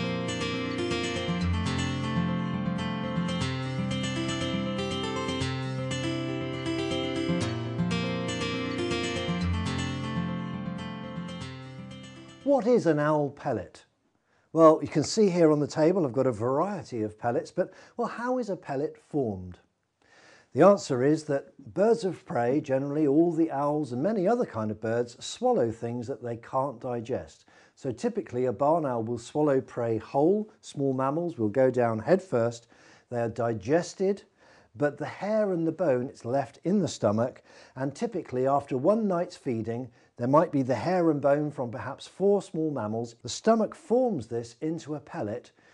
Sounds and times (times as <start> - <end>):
Speech: 12.5 - 13.9, 14.6 - 19.7, 20.5 - 45.5.